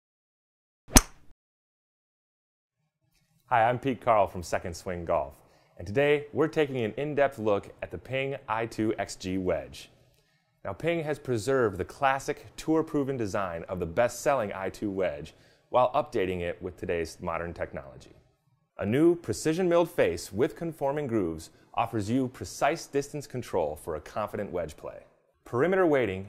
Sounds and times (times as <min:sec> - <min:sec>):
Speech: 0:03.5 - 0:10.0, 0:10.6 - 0:18.2, 0:18.8 - 0:26.2.